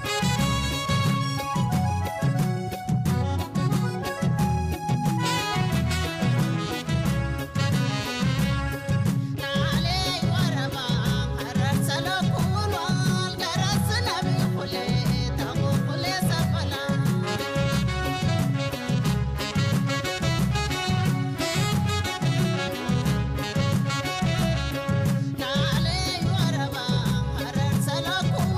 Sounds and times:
Folk music: 0.0s - 28.5s.

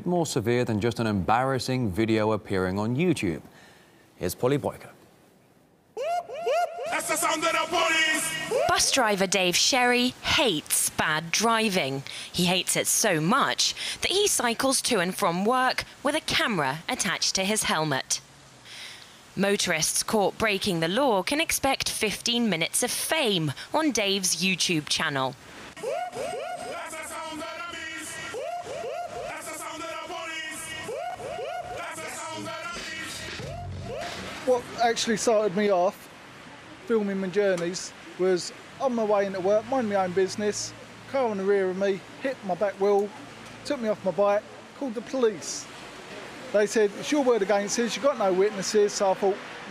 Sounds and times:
Speech: 7.0s - 18.2s, 19.4s - 25.4s, 46.5s - 49.4s.

